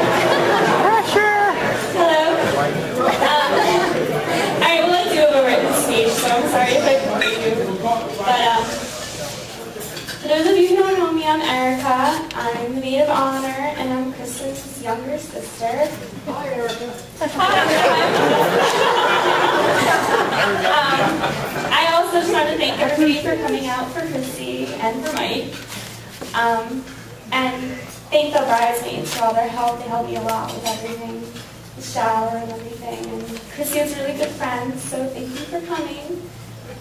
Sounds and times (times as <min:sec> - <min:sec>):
Female speech, woman speaking: 0:01.9 - 0:08.9, 0:10.2 - 0:18.3, 0:20.6 - 0:25.6, 0:26.3 - 0:36.3.